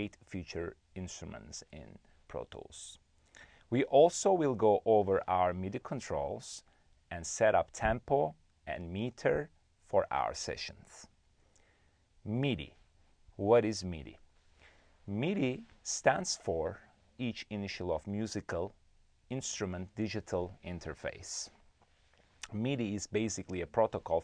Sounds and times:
Speech: 0:00.0 - 0:03.0, 0:03.7 - 0:11.2, 0:12.2 - 0:12.8, 0:13.4 - 0:14.2, 0:15.1 - 0:21.6, 0:22.4 - 0:24.2.

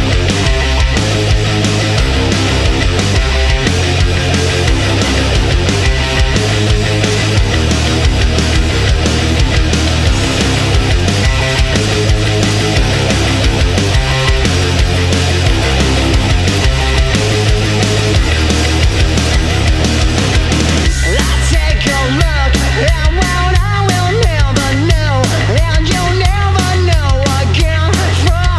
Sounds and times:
Music: 0:00.0 - 0:28.5.

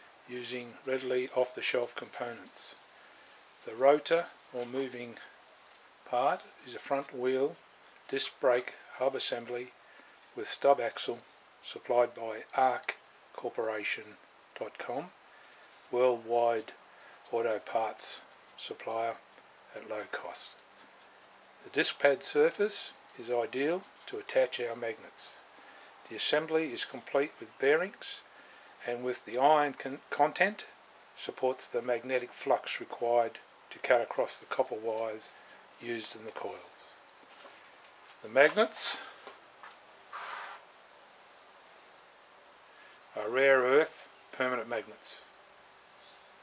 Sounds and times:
Speech: 0:00.3 - 0:02.8, 0:03.6 - 0:05.4, 0:06.1 - 0:09.8, 0:10.4 - 0:15.2, 0:15.9 - 0:20.6, 0:21.6 - 0:25.4, 0:26.0 - 0:37.0, 0:38.2 - 0:39.2, 0:43.1 - 0:45.3.

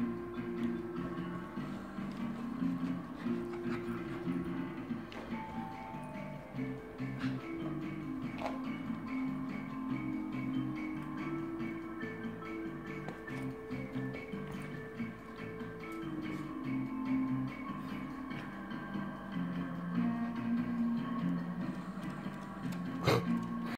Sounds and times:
Music: 0:00.0 - 0:23.7
Dog: 0:00.6 - 0:05.4, 0:22.8 - 0:23.7.

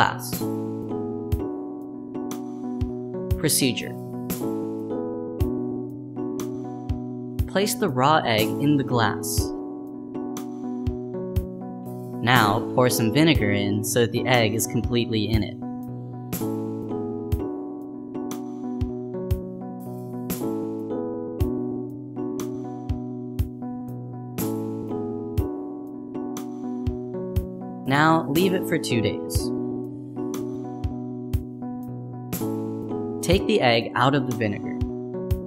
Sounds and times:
Speech: 0:00.0 - 0:00.4, 0:03.4 - 0:04.0, 0:07.5 - 0:09.5, 0:12.2 - 0:15.6, 0:27.9 - 0:29.5, 0:33.2 - 0:34.8
Music: 0:00.0 - 0:35.4.

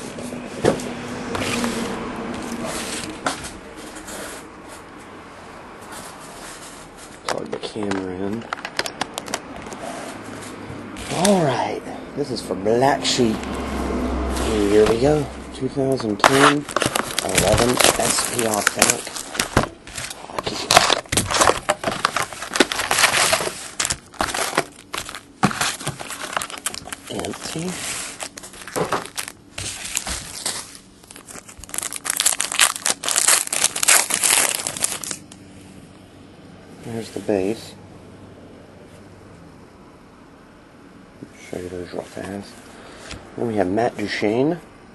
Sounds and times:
Speech: 0:07.2 - 0:08.5, 0:11.1 - 0:13.4, 0:14.5 - 0:19.1, 0:27.1 - 0:27.8, 0:36.8 - 0:37.8, 0:41.2 - 0:42.6, 0:43.4 - 0:44.7.

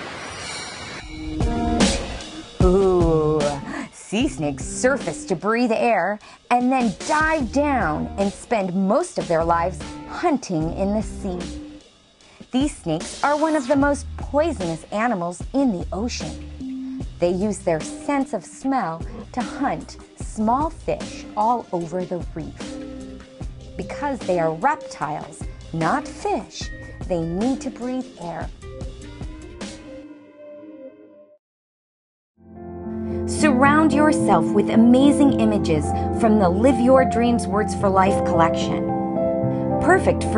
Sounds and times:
Music: 0:00.1 - 0:31.4, 0:32.4 - 0:40.3
Speech: 0:02.6 - 0:11.6, 0:12.5 - 0:16.4, 0:17.2 - 0:22.6, 0:23.8 - 0:28.5, 0:33.3 - 0:38.8, 0:39.8 - 0:40.3.

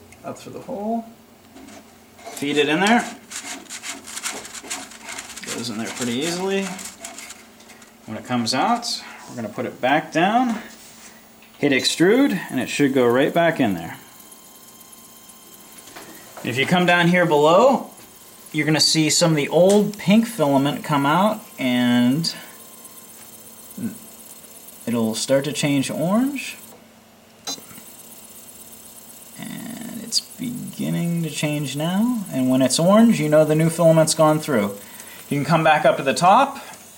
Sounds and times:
Speech: 0:00.2 - 0:01.2, 0:02.4 - 0:03.2, 0:05.4 - 0:06.8, 0:08.1 - 0:10.7, 0:11.6 - 0:14.1, 0:16.4 - 0:18.0, 0:18.6 - 0:22.4, 0:24.8 - 0:26.7, 0:29.4 - 0:36.8.

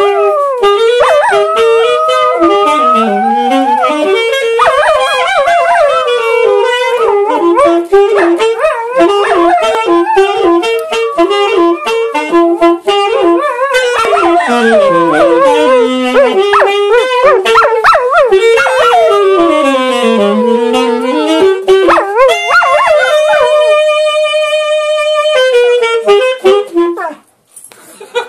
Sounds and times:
Music: 0:00.0 - 0:27.2
Yip: 0:04.6 - 0:06.0, 0:07.6 - 0:11.0, 0:13.7 - 0:19.2
Bow-wow: 0:14.0 - 0:19.1.

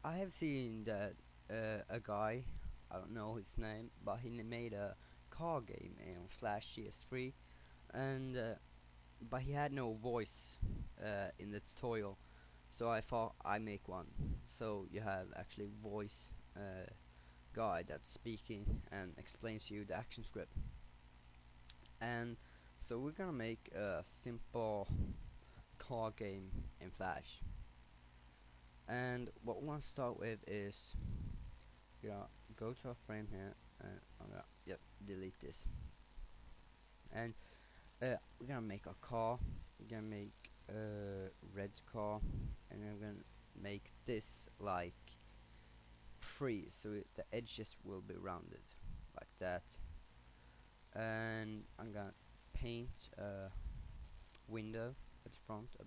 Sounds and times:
Speech: 0:00.0 - 0:08.6, 0:09.2 - 0:20.6, 0:22.0 - 0:25.2, 0:25.8 - 0:27.5, 0:28.9 - 0:31.1, 0:32.0 - 0:35.8, 0:37.1 - 0:37.4, 0:38.0 - 0:45.2, 0:46.2 - 0:49.8, 0:50.9 - 0:53.6, 0:54.4 - 0:55.8.

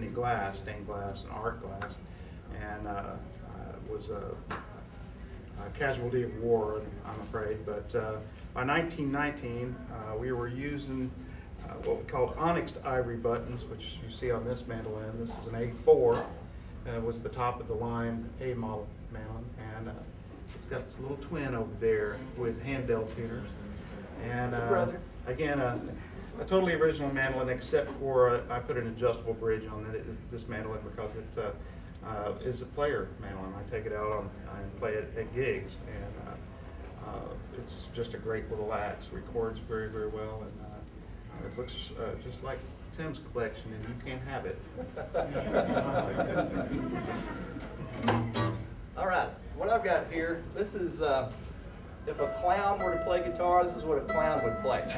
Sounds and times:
Speech: 0:00.0 - 0:23.6, 0:24.2 - 0:44.6, 0:49.0 - 0:51.4, 0:52.1 - 0:54.9.

